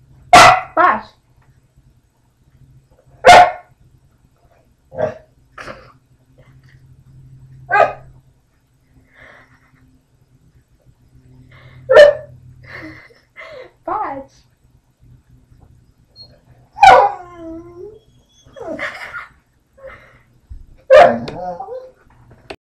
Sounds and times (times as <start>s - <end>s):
Bow-wow: 0.3s - 0.7s, 3.2s - 3.7s, 20.9s - 21.6s
Yip: 0.3s - 0.8s, 3.2s - 3.7s, 16.8s - 17.2s, 20.9s - 21.4s
Speech: 0.8s - 1.2s, 13.8s - 14.4s
Whimper (dog): 16.2s - 18.9s.